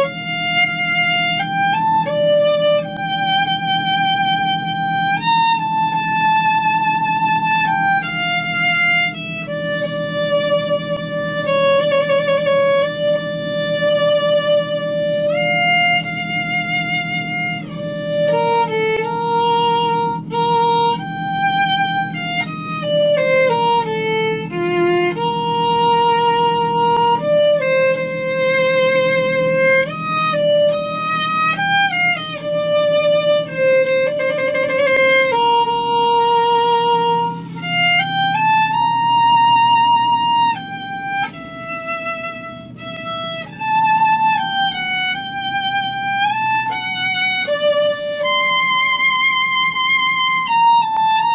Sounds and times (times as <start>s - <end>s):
Violin, fiddle: 0.0s - 51.3s.